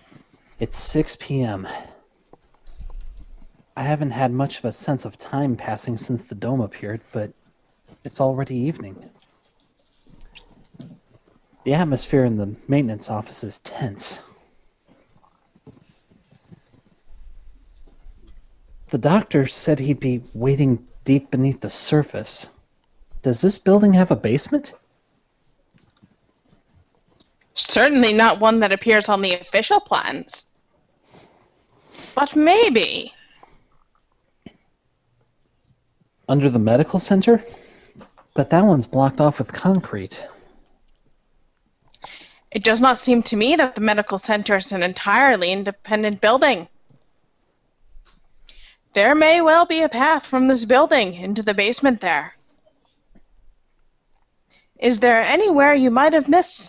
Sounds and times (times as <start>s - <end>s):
Speech: 0.6s - 2.0s, 3.8s - 7.4s, 8.0s - 9.1s, 11.7s - 14.3s, 18.9s - 22.6s, 23.2s - 24.8s, 27.6s - 30.5s, 32.2s - 33.2s, 36.3s - 37.5s, 38.4s - 40.5s, 42.6s - 46.7s, 49.0s - 52.4s, 54.8s - 56.6s.